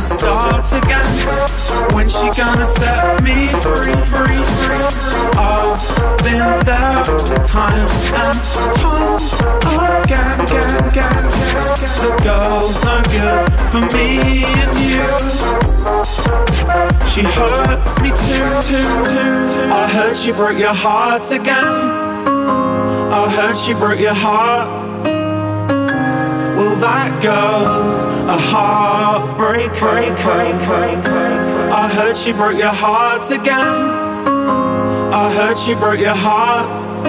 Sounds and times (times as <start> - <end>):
Dubstep: 0.0 - 21.7.